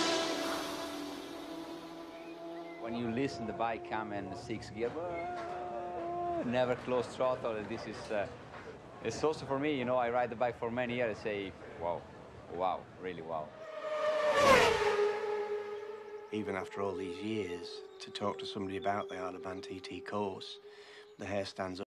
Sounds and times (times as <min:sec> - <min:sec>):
Speech: 0:02.8 - 0:05.4, 0:06.3 - 0:08.4, 0:09.0 - 0:13.5, 0:16.4 - 0:20.6, 0:21.2 - 0:21.9.